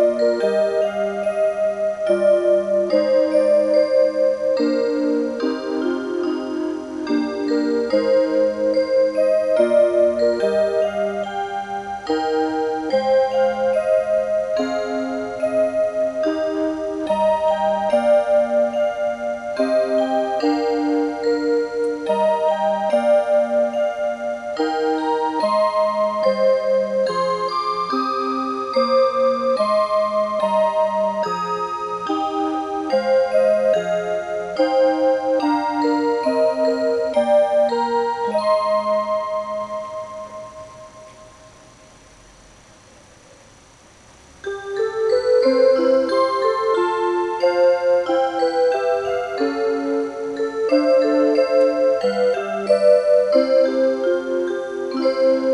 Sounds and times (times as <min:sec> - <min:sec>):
Music: 0:00.0 - 0:42.3, 0:44.3 - 0:55.5.